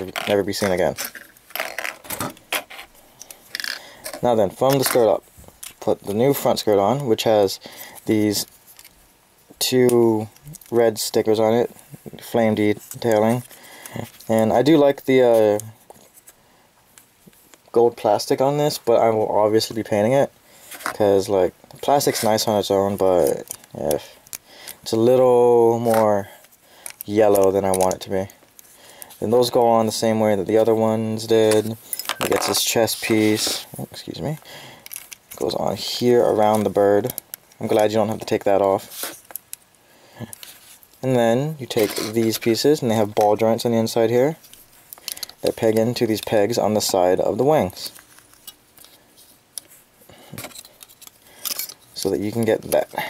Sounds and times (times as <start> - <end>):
Speech: 0.0 - 1.0, 4.2 - 5.2, 5.8 - 8.5, 9.6 - 13.4, 14.3 - 15.8, 17.7 - 20.3, 20.9 - 24.2, 24.8 - 26.3, 27.1 - 28.4, 29.2 - 34.4, 35.4 - 38.9, 41.0 - 44.4, 45.4 - 48.0, 52.0 - 53.0
Inside, small room: 0.0 - 53.0.